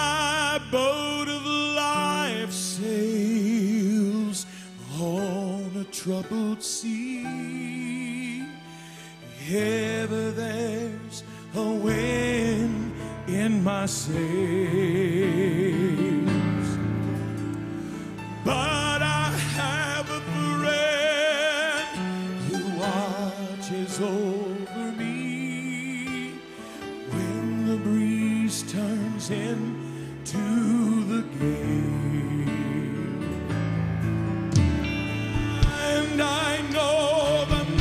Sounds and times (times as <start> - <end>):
Music: 0.0 - 37.8.